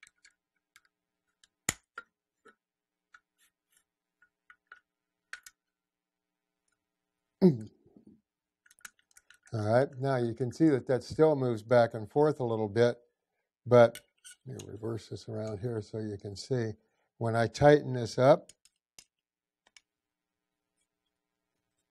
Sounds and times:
Inside, small room: 0.0s - 21.9s
Speech: 7.4s - 7.7s, 9.6s - 13.0s, 13.7s - 18.5s.

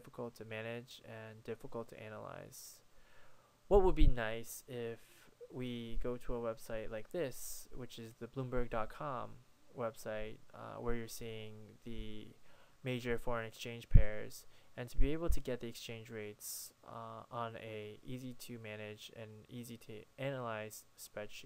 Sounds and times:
Speech: 0.0s - 2.8s, 3.7s - 21.4s.

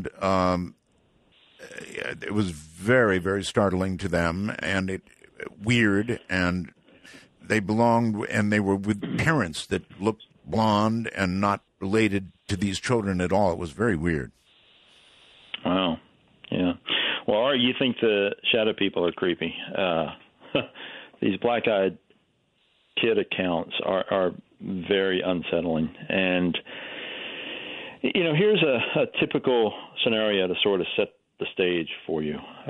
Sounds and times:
Speech: 0.0s - 0.8s, 1.6s - 6.8s, 7.5s - 14.3s, 15.6s - 20.2s, 21.2s - 22.0s, 23.0s - 26.7s, 28.0s - 32.6s.

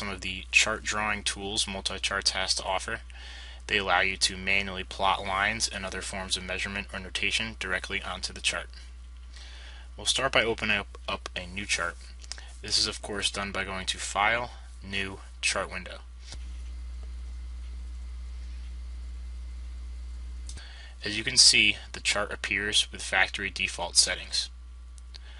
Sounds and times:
Speech: 0.0s - 3.1s, 3.7s - 8.9s, 10.0s - 16.1s, 21.0s - 24.6s.

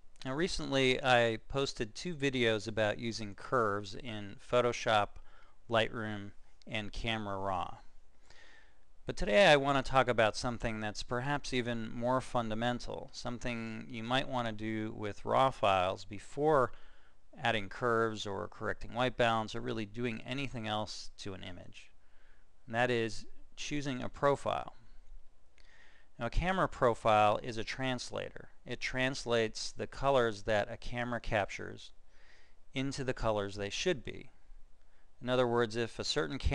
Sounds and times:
Speech: 0.2s - 7.9s, 9.0s - 16.8s, 17.4s - 22.0s, 22.7s - 24.9s, 26.2s - 32.0s, 32.7s - 34.4s, 35.2s - 36.5s.

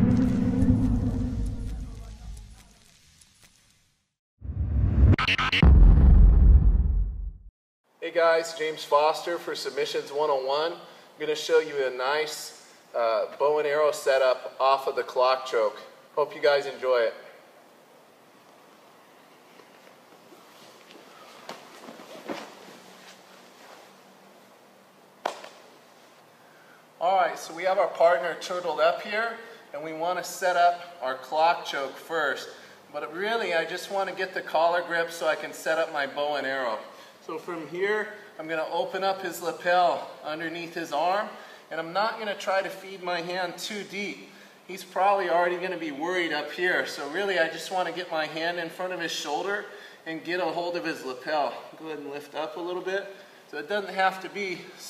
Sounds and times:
Music: 0.0s - 2.6s, 5.1s - 6.2s
Rumble: 0.0s - 3.0s, 4.4s - 7.5s
Speech: 8.0s - 17.4s, 27.0s - 54.8s.

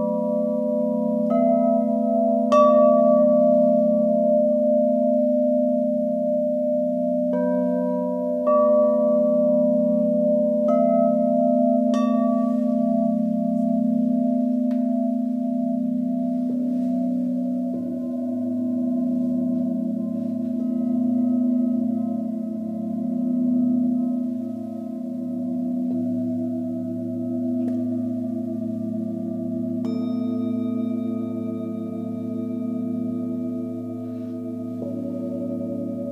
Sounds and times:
Tubular bells: 0.0s - 36.1s.

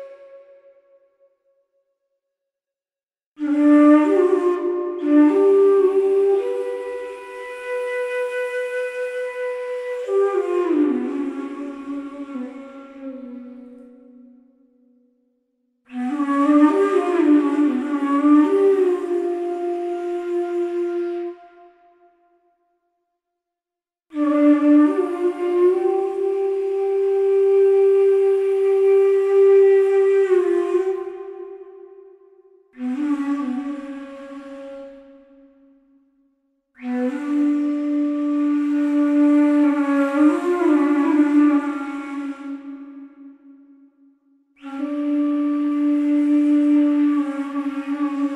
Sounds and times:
Music: 0.0s - 2.5s, 3.4s - 48.3s.

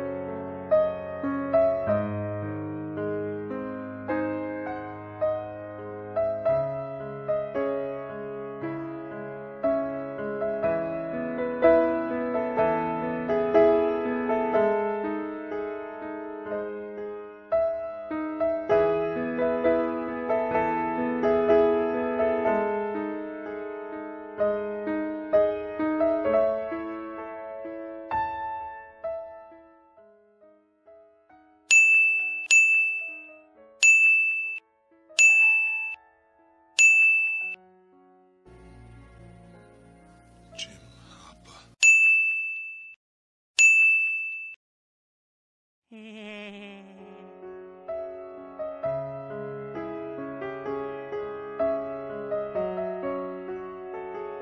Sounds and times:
Music: 0.0s - 31.7s, 33.0s - 33.8s, 34.6s - 36.8s, 37.6s - 41.8s, 47.0s - 54.4s.

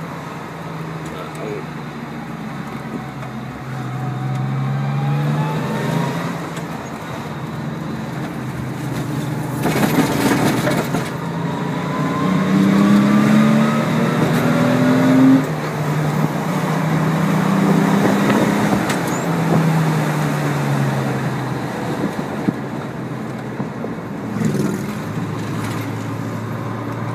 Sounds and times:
Car: 0.0s - 27.1s
Traffic noise, roadway noise: 0.0s - 27.1s.

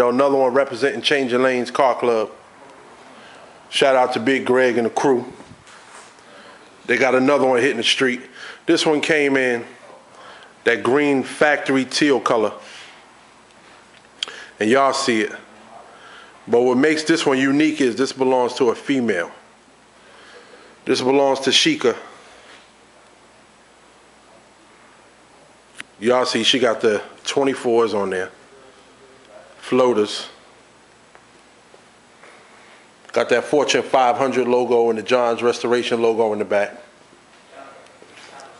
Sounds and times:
Speech: 0.0s - 5.4s, 6.9s - 12.6s, 14.6s - 19.4s, 20.8s - 22.2s, 25.4s - 30.4s, 33.1s - 36.9s, 37.5s - 38.5s.

